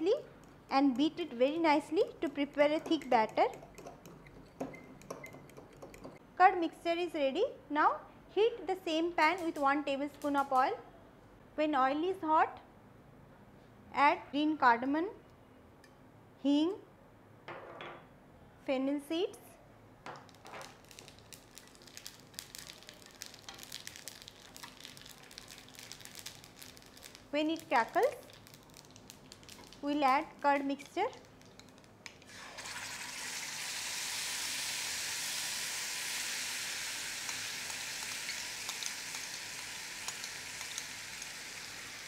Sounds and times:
Speech: 0.0 - 3.5, 6.4 - 10.8, 11.6 - 12.6, 13.9 - 15.2, 16.4 - 16.9, 18.6 - 19.6, 27.3 - 28.3, 29.8 - 31.2.

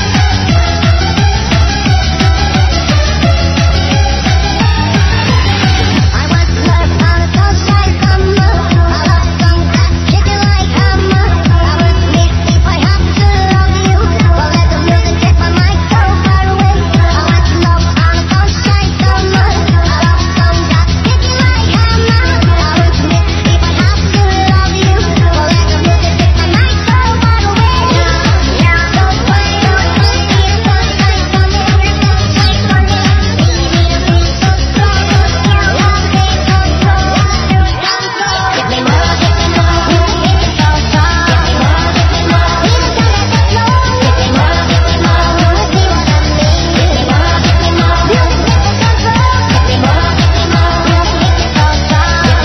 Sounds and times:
Music: 0.0 - 52.4.

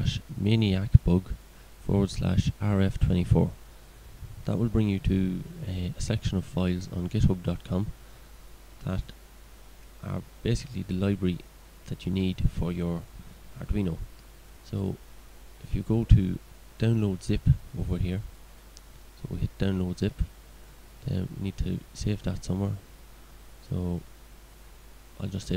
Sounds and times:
Speech: 0.0 - 3.6, 4.4 - 7.9, 8.8 - 9.2, 10.0 - 15.0, 15.6 - 18.3, 19.2 - 20.3, 21.0 - 22.8, 23.6 - 24.1, 25.2 - 25.5
Inside, small room: 0.0 - 25.5.

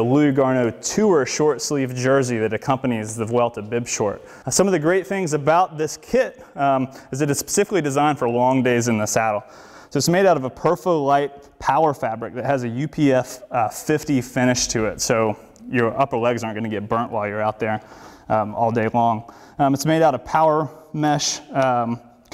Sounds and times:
Speech: 0.0 - 22.3.

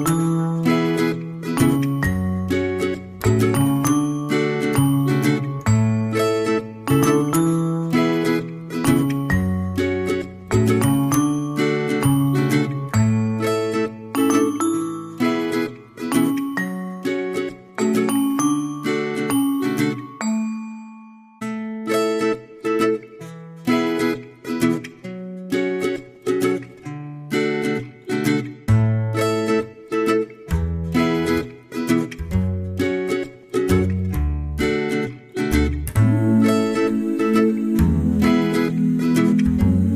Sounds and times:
Marimba, xylophone: 0.0 - 22.1
Glockenspiel: 0.0 - 23.0.

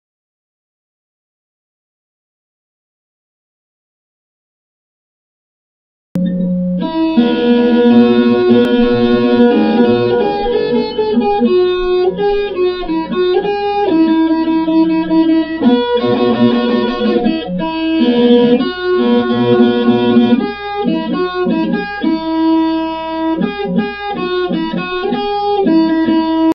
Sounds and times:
Electric guitar: 6.2 - 26.5.

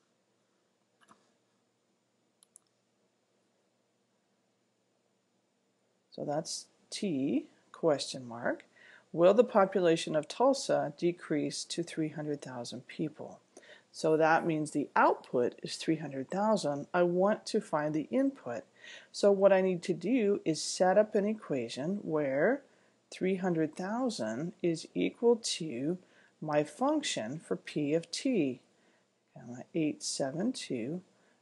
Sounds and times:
Speech: 6.2 - 28.7, 29.4 - 31.1.

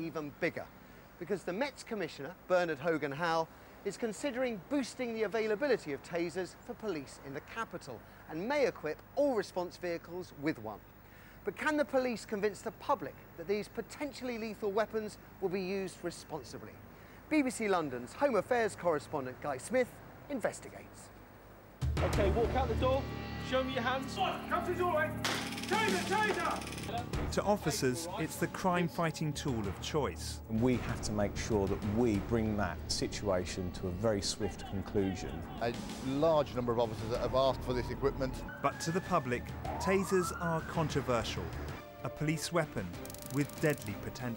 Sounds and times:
Speech: 0.0 - 10.8, 11.5 - 21.2, 22.0 - 25.1, 25.7 - 44.3.

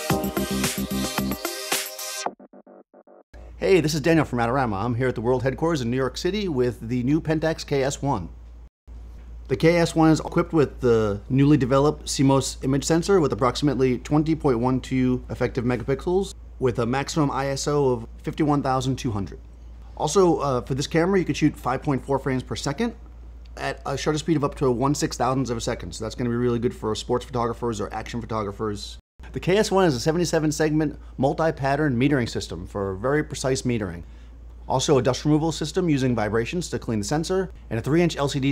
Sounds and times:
Speech: 3.6 - 8.4, 9.5 - 19.4, 20.0 - 23.0, 23.6 - 34.1, 34.7 - 38.5.

